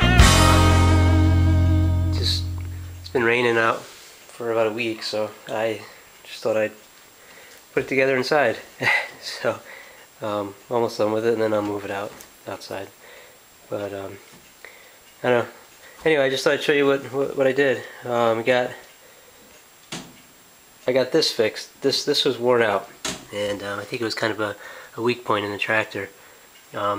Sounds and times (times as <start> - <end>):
Speech: 2.2 - 6.8, 7.7 - 13.0, 13.7 - 14.3, 15.2 - 18.9, 20.8 - 26.9.